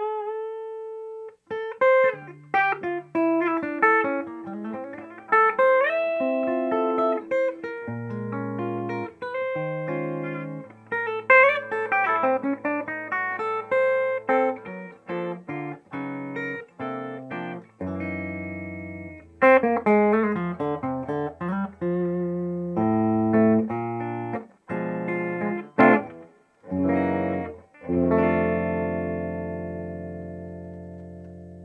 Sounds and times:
Electric guitar: 0.0s - 31.6s
Electronic tuner: 0.0s - 31.6s.

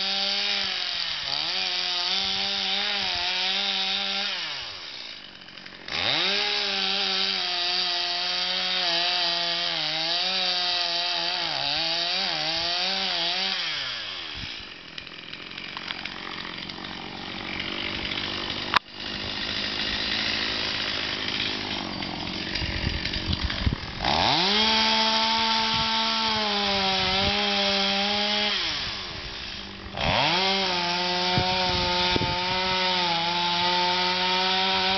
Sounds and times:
Chainsaw: 0.0s - 34.9s.

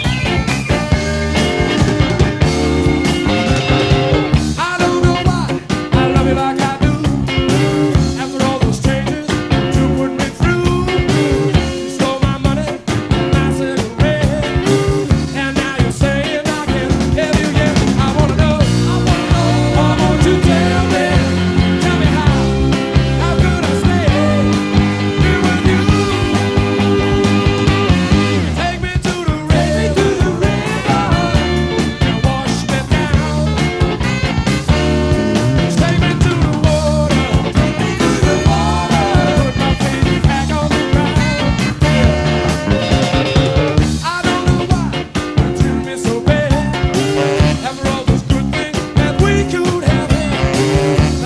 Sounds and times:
Ska: 0.0s - 51.2s.

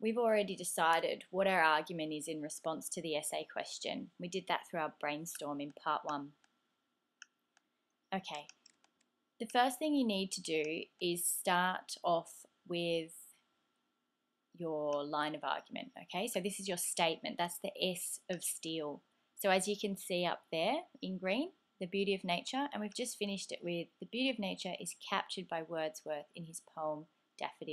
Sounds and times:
Speech: 0.0s - 6.3s, 8.2s - 8.5s, 9.4s - 13.3s, 14.6s - 27.7s.

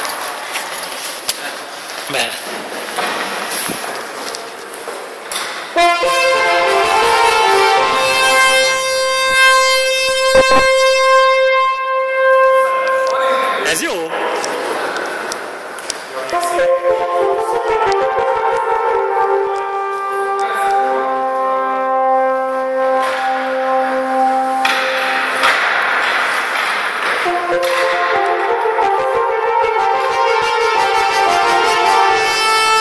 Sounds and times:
French horn: 5.8s - 13.8s, 16.2s - 25.7s, 27.2s - 32.8s.

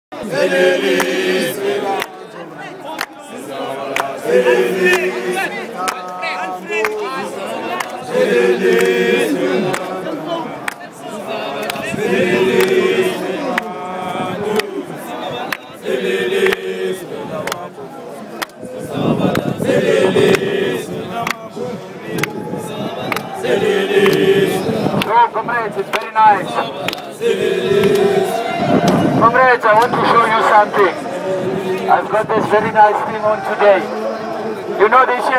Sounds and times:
Outside, urban or manmade: 0.1s - 35.3s
Speech: 1.9s - 8.2s, 25.0s - 26.8s, 29.2s - 31.0s, 31.8s - 35.3s.

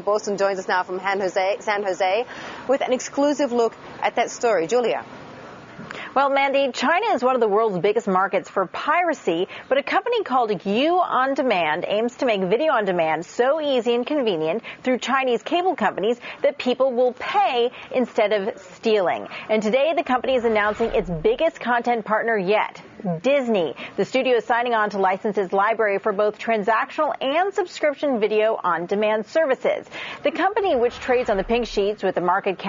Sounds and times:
Speech: 0.0s - 5.0s, 6.2s - 32.6s.

